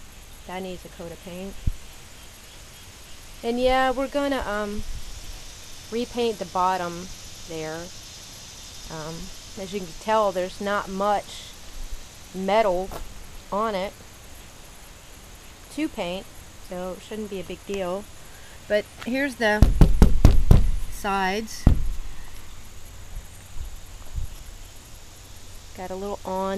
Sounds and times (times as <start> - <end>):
Speech: 0.5 - 1.6, 3.4 - 4.8, 6.0 - 7.9, 8.9 - 11.5, 12.4 - 12.9, 13.6 - 14.0, 15.7 - 18.1, 18.7 - 19.6, 21.0 - 21.7, 25.8 - 26.5.